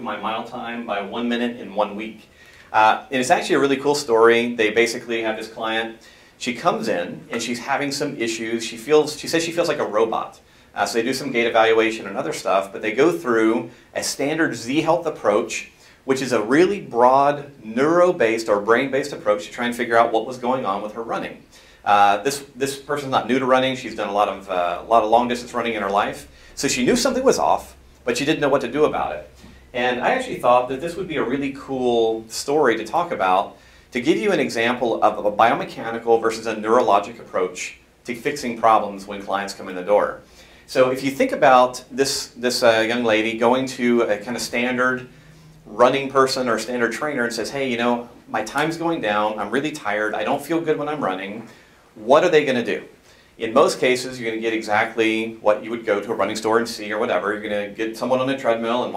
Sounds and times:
Inside, small room: 0.0s - 58.9s
Speech: 0.0s - 58.9s.

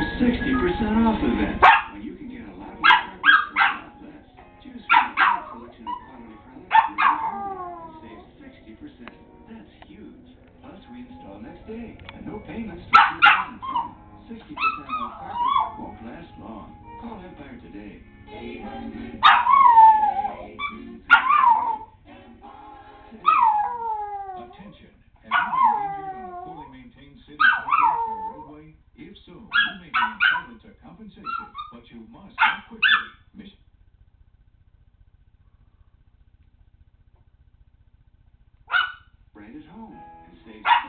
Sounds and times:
Speech: 0.1s - 18.0s, 24.0s - 33.7s, 39.4s - 40.8s.

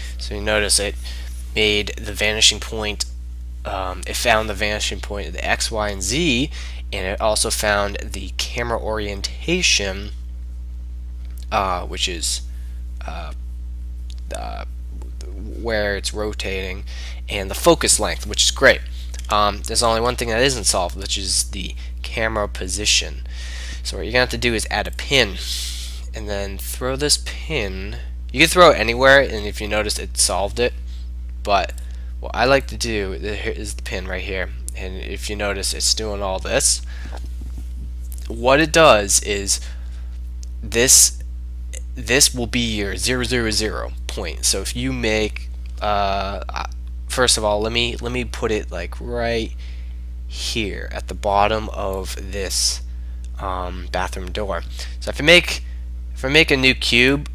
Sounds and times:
Speech: 0.0s - 3.1s, 3.7s - 10.2s, 11.4s - 13.4s, 14.1s - 30.8s, 31.4s - 36.9s, 38.2s - 39.8s, 40.4s - 41.2s, 41.8s - 49.6s, 50.3s - 57.3s.

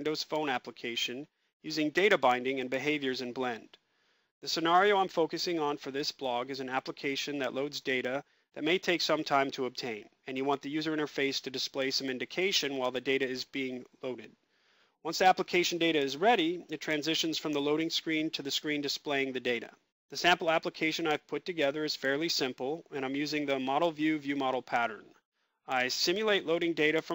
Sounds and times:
Speech: 0.0s - 3.8s, 4.4s - 14.4s, 15.1s - 27.1s.

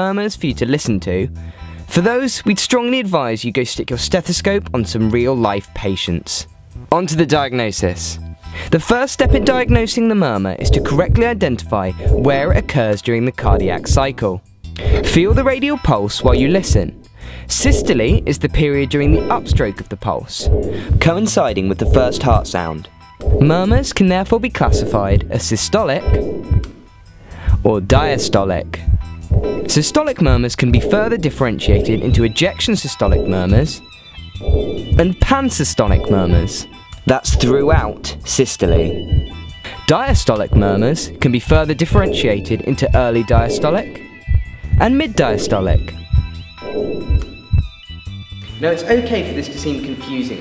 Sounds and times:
Speech: 0.0s - 1.3s, 1.9s - 26.2s, 27.6s - 28.9s, 29.7s - 33.8s, 35.0s - 39.0s, 39.9s - 44.0s, 44.8s - 46.0s, 48.6s - 50.4s
Music: 0.0s - 50.4s.

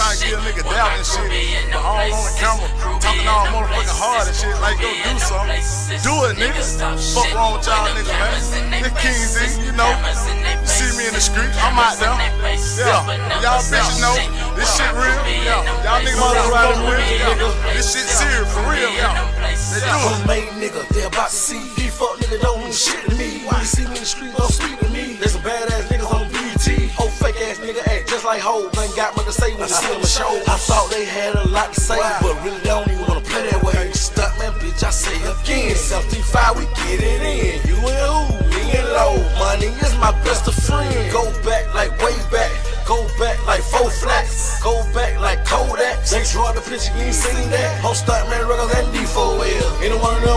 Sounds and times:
Music: 0.0s - 50.3s.

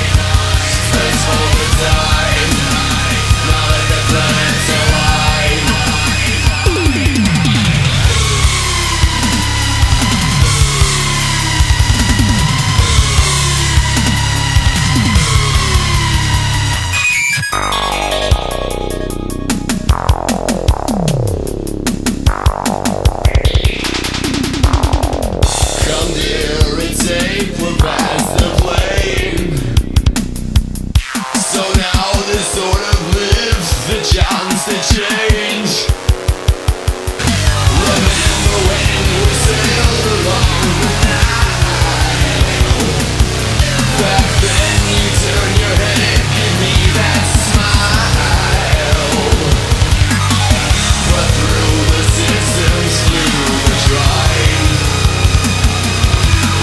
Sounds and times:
Music: 0.0s - 56.6s.

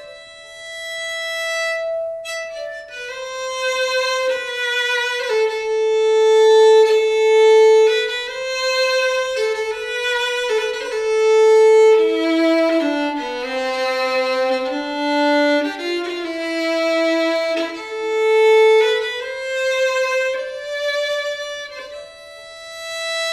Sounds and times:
Violin, fiddle: 0.0s - 23.3s.

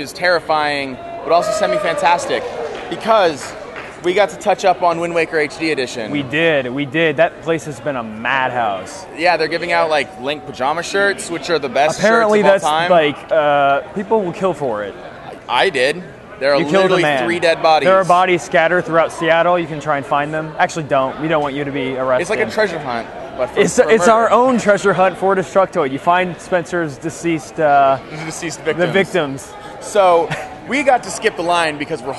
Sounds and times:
Speech: 0.0s - 32.1s.

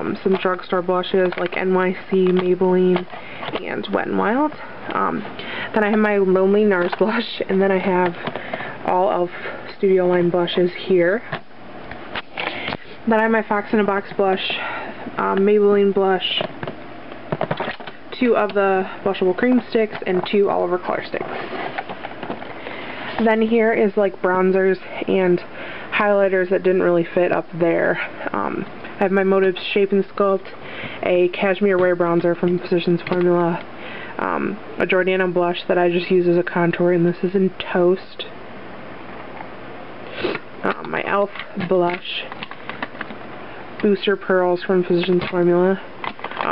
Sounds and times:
Speech: 0.0s - 8.2s, 8.8s - 11.4s, 13.0s - 16.5s, 18.1s - 21.3s, 23.2s - 33.6s, 34.2s - 38.4s, 40.6s - 42.4s, 43.8s - 46.5s
Inside, small room: 0.0s - 46.5s.

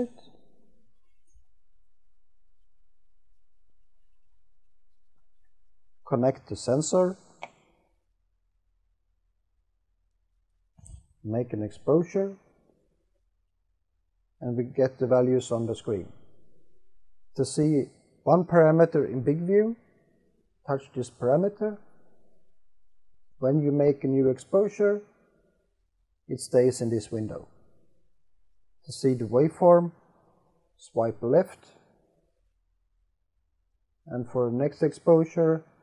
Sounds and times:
Speech: 0.0s - 0.3s, 6.1s - 7.2s, 11.3s - 12.4s, 14.4s - 16.2s, 17.4s - 19.8s, 20.7s - 21.8s, 23.4s - 25.1s, 26.3s - 27.5s, 28.9s - 30.0s, 30.8s - 31.8s, 34.1s - 35.8s
Inside, small room: 0.0s - 35.8s.

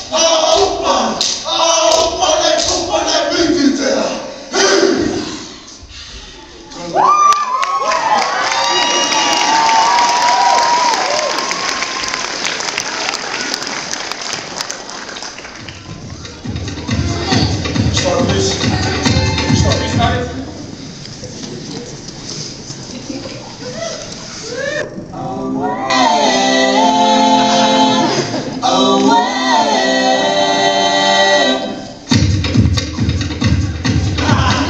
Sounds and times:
Crowd: 0.0s - 26.2s, 32.1s - 34.6s
Cheering: 6.8s - 15.1s.

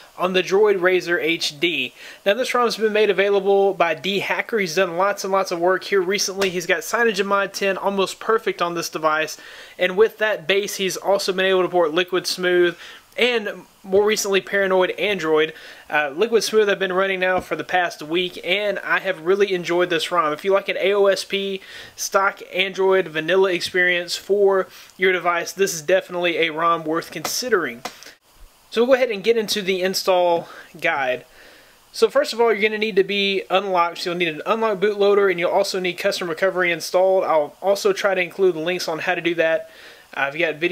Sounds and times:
Speech: 0.0s - 27.9s, 28.7s - 31.3s, 31.9s - 40.7s.

